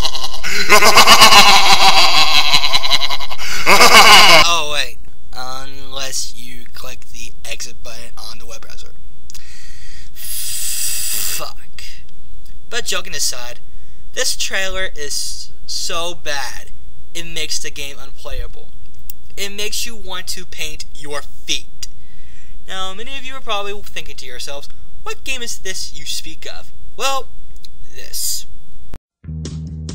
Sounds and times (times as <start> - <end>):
Speech: 4.4 - 9.0, 10.2 - 12.1, 12.7 - 13.6, 14.2 - 21.9, 22.7 - 27.3, 27.9 - 28.5.